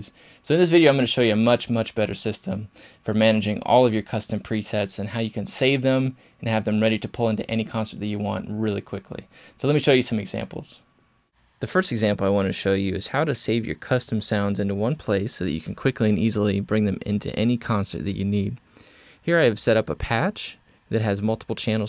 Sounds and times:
Speech: 0.0s - 10.9s, 11.6s - 18.6s, 19.2s - 21.8s.

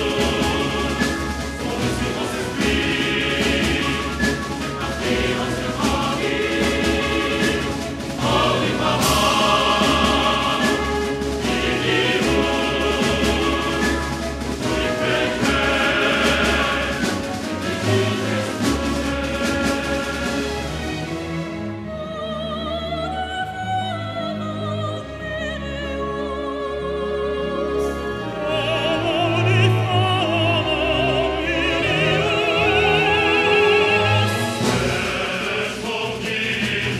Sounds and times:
Music: 0.0s - 37.0s.

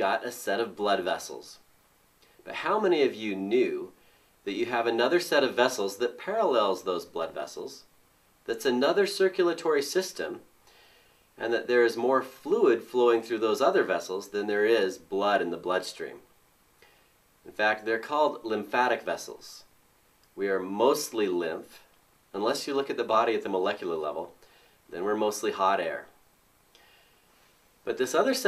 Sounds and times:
Speech: 0.0s - 1.6s, 2.4s - 10.5s, 11.4s - 16.3s, 17.5s - 19.7s, 20.4s - 26.2s, 27.8s - 28.4s.

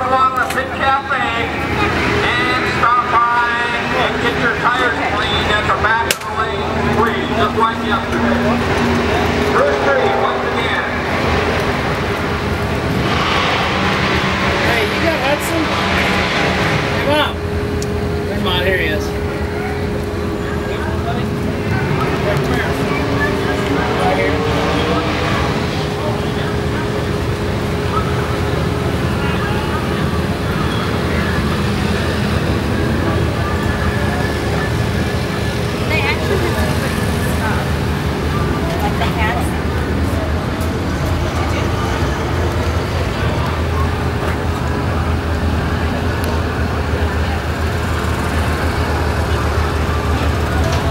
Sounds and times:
Bus: 0.0s - 50.9s
Traffic noise, roadway noise: 0.0s - 50.9s.

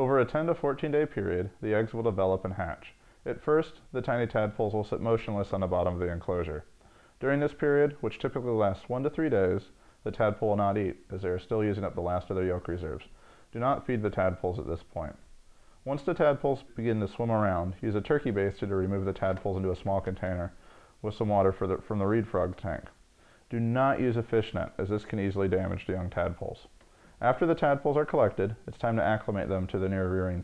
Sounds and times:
Speech: 0.0s - 30.4s.

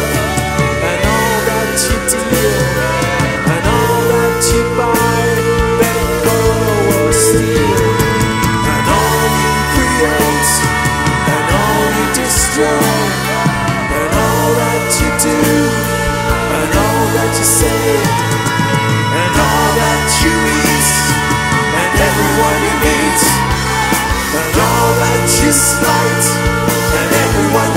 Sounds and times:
Christian music: 0.0s - 27.7s
Progressive rock: 0.0s - 27.7s
Singing: 0.0s - 27.7s.

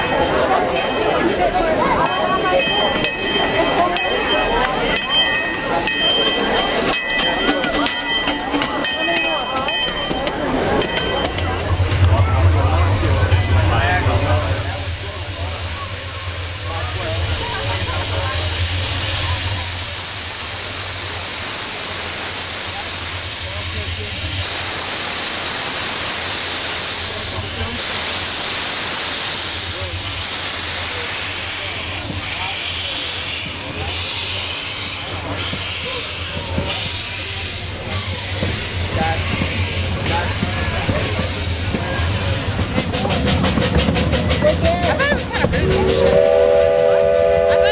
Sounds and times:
Speech: 0.0s - 20.9s, 26.8s - 28.6s, 29.3s - 46.2s
Hiss: 14.0s - 44.0s.

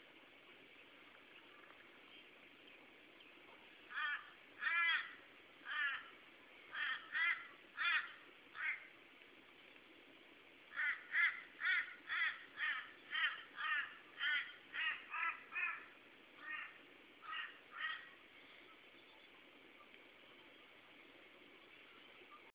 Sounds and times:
Caw: 3.9s - 6.1s, 6.7s - 8.9s, 10.7s - 18.2s.

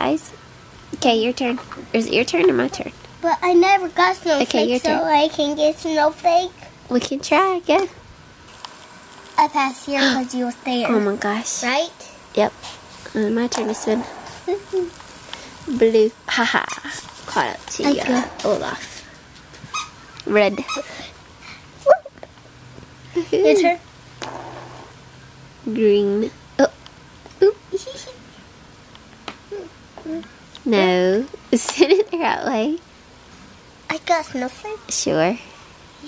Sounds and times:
Inside, small room: 0.0s - 36.0s
Child speech, kid speaking: 1.0s - 8.0s, 9.4s - 15.0s, 15.7s - 19.0s, 23.2s - 23.8s, 27.4s - 28.2s, 29.5s - 30.9s, 33.9s - 36.0s.

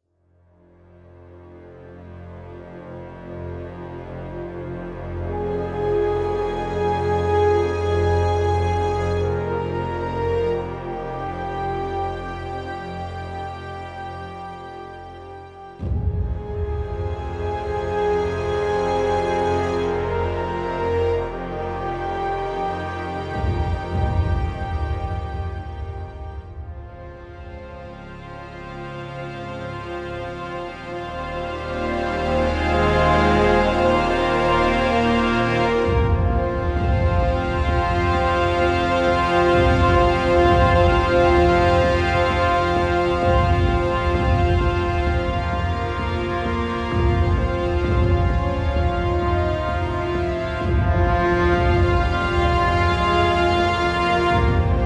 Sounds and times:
Music: 0.0s - 54.8s.

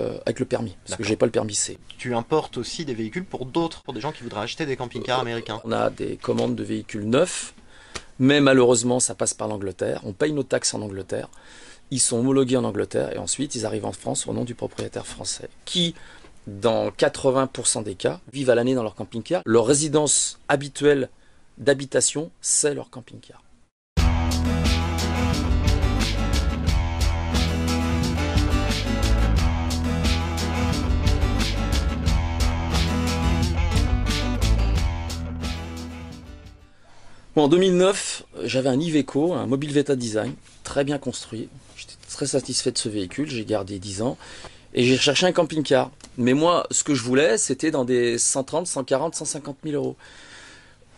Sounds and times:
Speech: 0.0s - 7.6s, 8.2s - 23.5s, 37.4s - 44.2s, 44.8s - 50.0s
Music: 24.0s - 36.8s.

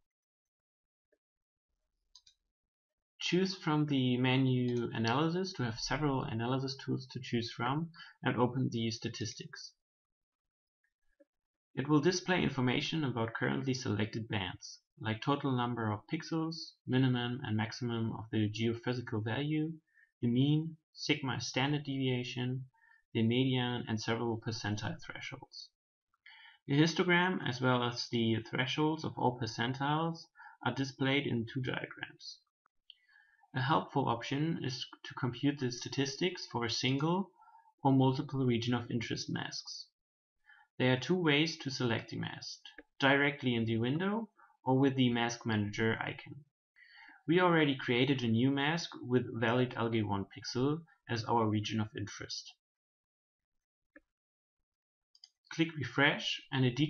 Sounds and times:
Speech: 3.2s - 9.8s, 11.8s - 25.8s, 26.7s - 32.5s, 33.5s - 40.0s, 40.8s - 46.5s, 47.2s - 52.6s, 55.5s - 56.8s.

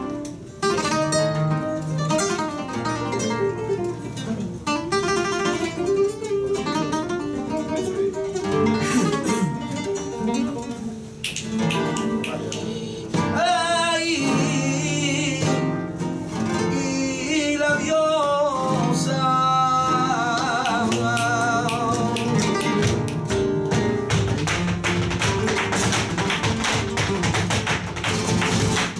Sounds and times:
Flamenco: 0.0s - 28.9s.

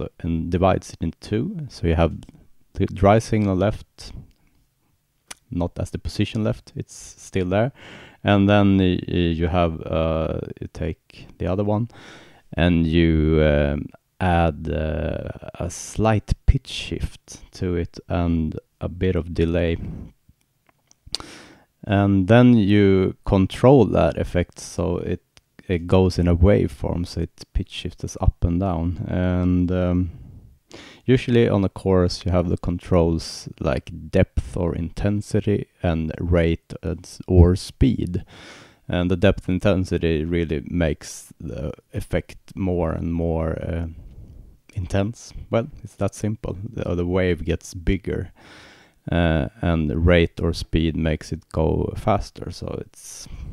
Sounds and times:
Narration, monologue: 0.0s - 53.5s.

